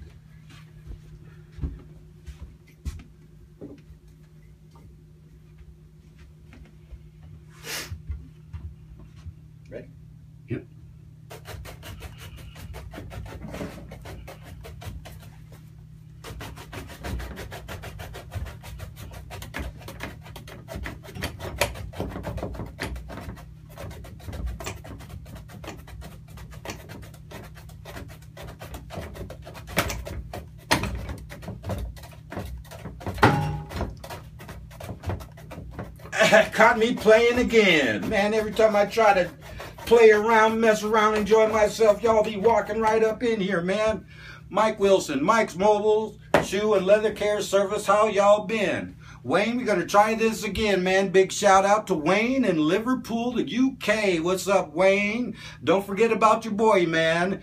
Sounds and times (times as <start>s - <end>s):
Speech: 10.5s - 10.7s, 36.2s - 57.4s.